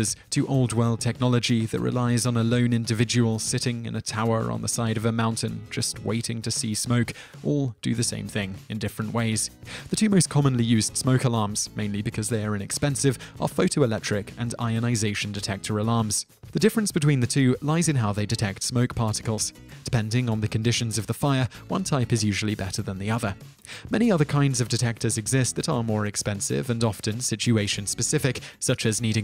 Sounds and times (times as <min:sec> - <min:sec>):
Music: 0:00.0 - 0:29.2
Speech: 0:00.0 - 0:29.2.